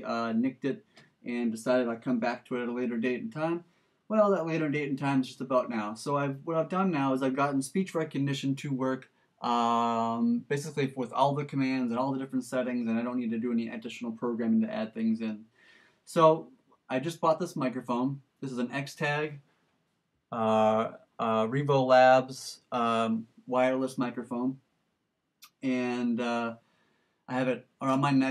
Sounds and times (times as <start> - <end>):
Male speech, man speaking: 0.0 - 15.4, 16.1 - 19.4, 20.4 - 24.6, 25.4 - 26.6, 27.3 - 28.3.